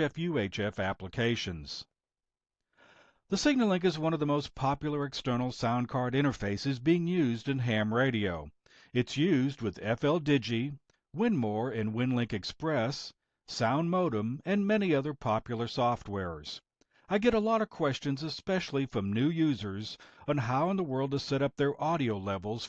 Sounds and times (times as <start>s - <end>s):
Speech: 0.0s - 1.9s, 3.3s - 22.6s.